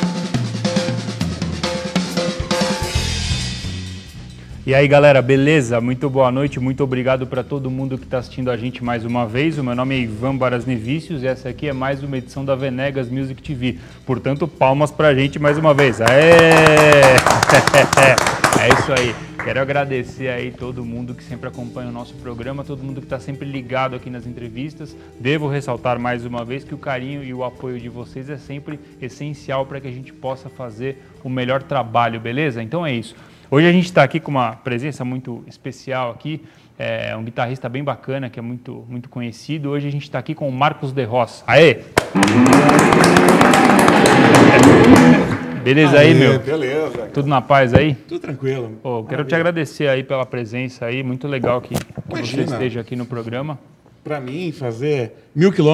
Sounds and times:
Music: 0:00.0 - 0:38.7, 0:39.8 - 0:49.9
Speech: 0:04.7 - 0:17.2, 0:18.0 - 0:41.8, 0:45.7 - 0:55.7.

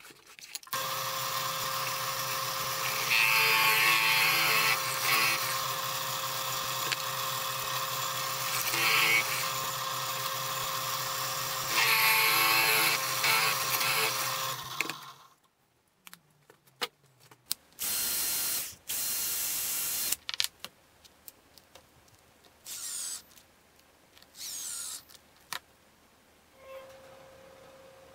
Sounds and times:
Drill: 0:00.8 - 0:15.2, 0:17.8 - 0:20.2, 0:22.7 - 0:23.2, 0:24.4 - 0:25.0.

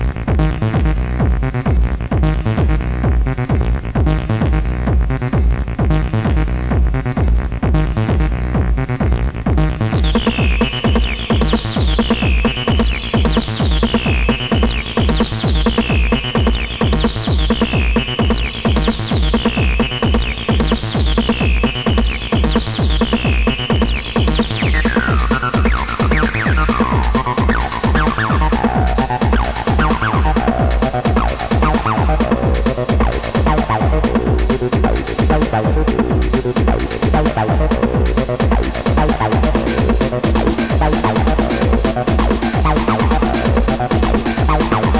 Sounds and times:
Techno: 0:00.0 - 0:45.0.

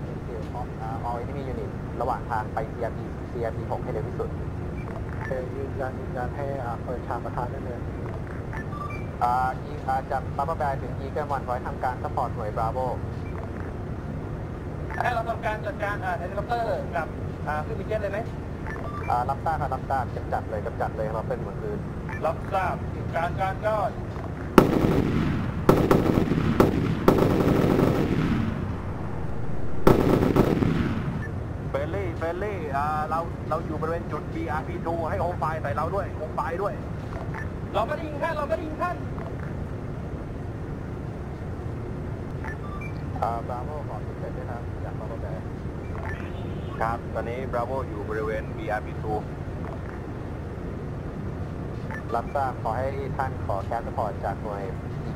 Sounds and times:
Speech: 0:00.0 - 0:04.3, 0:05.2 - 0:07.9, 0:09.2 - 0:13.1, 0:15.0 - 0:18.3, 0:19.0 - 0:24.0, 0:31.8 - 0:36.9, 0:37.7 - 0:39.0, 0:43.2 - 0:45.4, 0:46.8 - 0:49.3, 0:52.0 - 0:54.8.

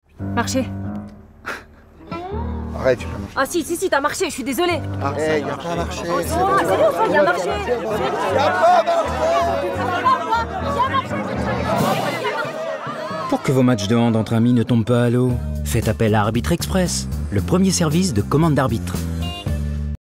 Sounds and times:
Music: 0:00.1 - 0:20.0
Speech: 0:13.3 - 0:19.0.

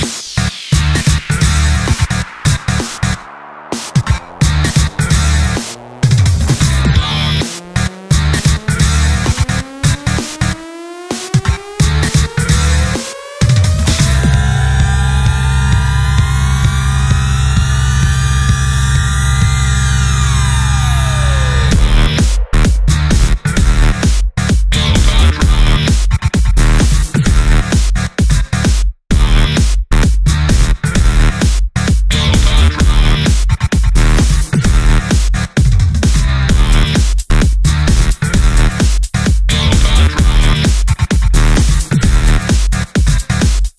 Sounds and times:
Throbbing: 0:00.7 - 0:25.9, 0:39.5 - 0:42.5.

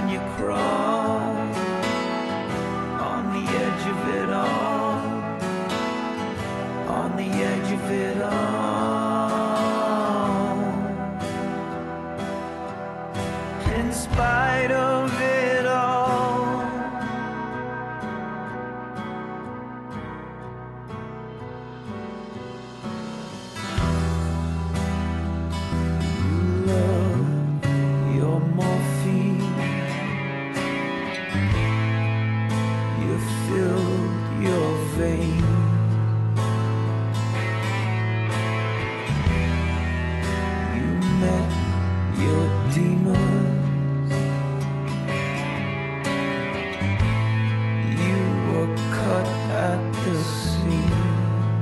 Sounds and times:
Music: 0:00.0 - 0:51.6.

